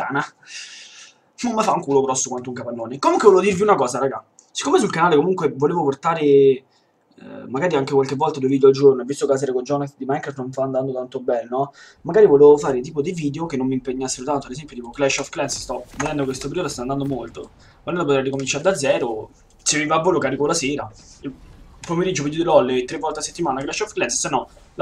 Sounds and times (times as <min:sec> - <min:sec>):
Speech: 0:00.0 - 0:24.8.